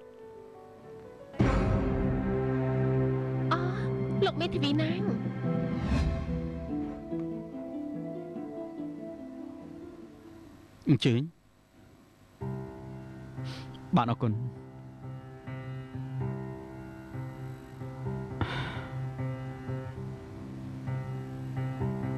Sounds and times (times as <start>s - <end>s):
Music: 0.0s - 10.9s, 12.4s - 22.1s.